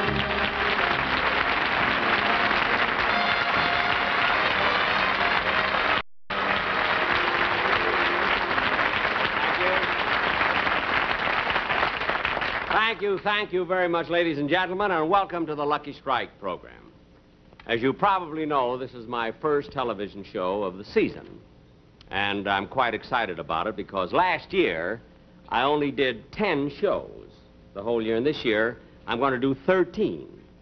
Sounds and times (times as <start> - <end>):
Speech: 12.7 - 17.0, 17.6 - 21.4, 22.1 - 30.5.